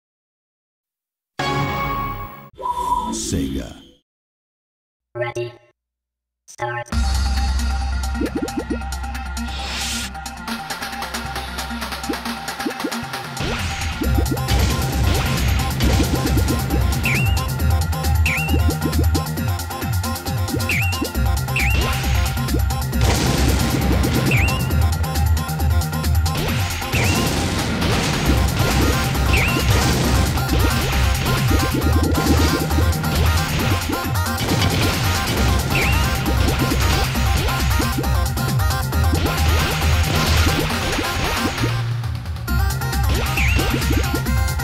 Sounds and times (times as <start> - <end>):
Music: 1.4 - 2.6, 6.8 - 44.6.